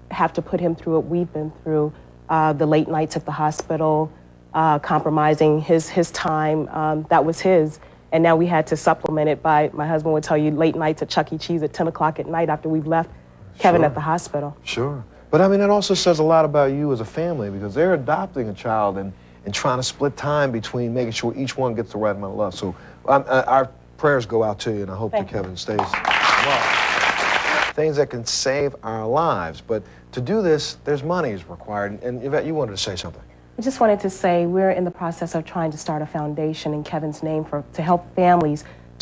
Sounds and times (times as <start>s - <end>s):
Female speech, woman speaking: 0.1s - 14.6s, 33.6s - 39.0s.